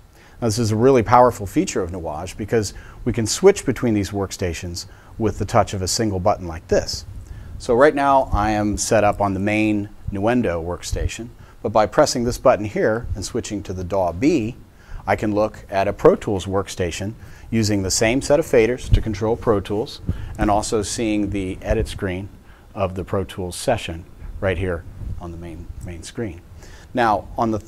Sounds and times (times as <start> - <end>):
Speech: 0.4 - 27.6.